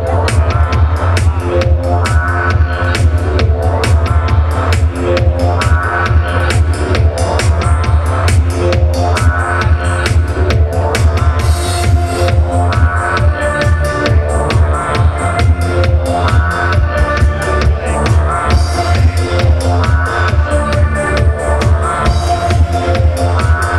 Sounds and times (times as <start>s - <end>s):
Music: 0.0s - 23.7s.